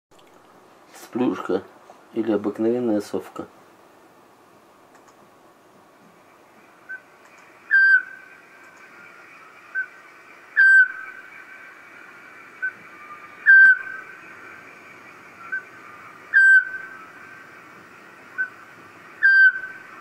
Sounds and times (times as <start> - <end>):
Owl: 7.7 - 8.3, 9.7 - 9.9, 10.6 - 11.3, 12.6 - 14.1, 15.4 - 17.1, 18.4 - 18.6, 19.2 - 20.0.